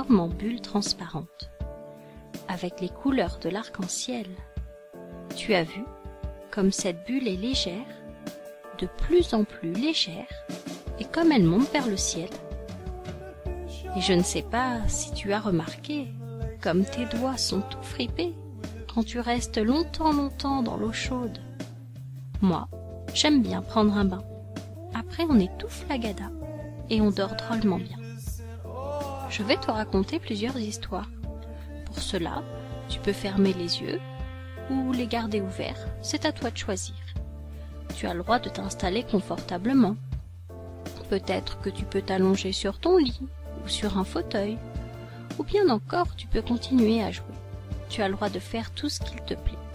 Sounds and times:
Speech: 0.0 - 1.5, 2.5 - 4.4, 5.4 - 5.9, 6.5 - 8.0, 8.8 - 12.4, 13.2 - 21.5, 22.4 - 31.2, 31.8 - 37.1, 38.0 - 40.0, 41.0 - 44.6, 45.4 - 49.6
Music: 0.0 - 49.7.

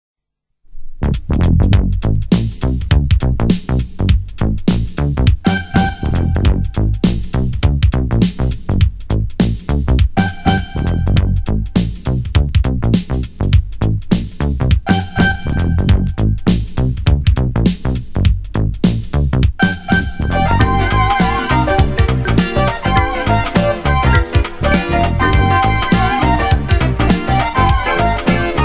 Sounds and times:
Soul music: 5.4 - 7.5, 10.2 - 12.0, 14.8 - 16.5, 19.6 - 28.6.

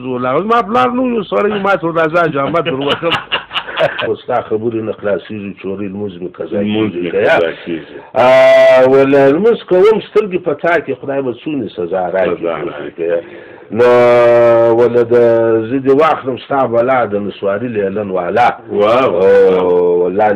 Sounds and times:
Speech: 0.0 - 3.2, 4.0 - 20.3.

